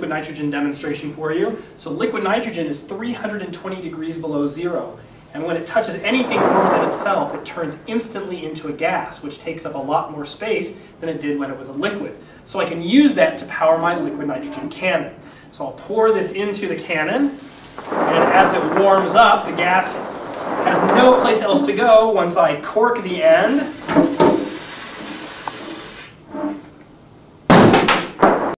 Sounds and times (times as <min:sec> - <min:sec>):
Speech: 0:00.0 - 0:17.4, 0:18.0 - 0:20.0, 0:20.7 - 0:23.8
Spray: 0:17.3 - 0:21.8, 0:23.0 - 0:26.2.